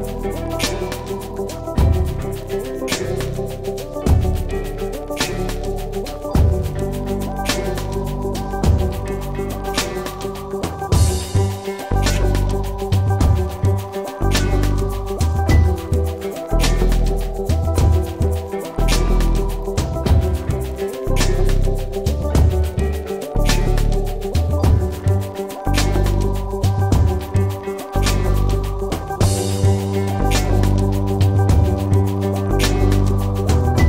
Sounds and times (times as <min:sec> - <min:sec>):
Music: 0:00.0 - 0:33.8.